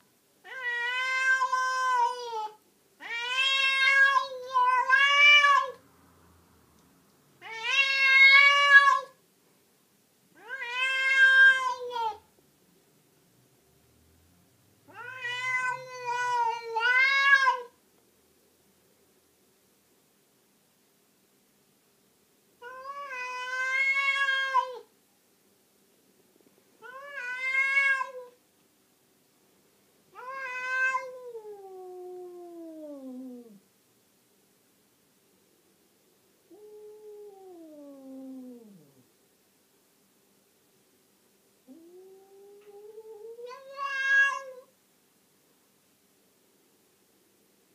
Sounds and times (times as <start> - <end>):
Meow: 0.4 - 5.8, 7.4 - 9.2, 10.4 - 12.3, 14.9 - 17.8, 22.6 - 24.9, 26.8 - 28.4, 30.1 - 33.6, 36.5 - 39.0, 41.7 - 44.8.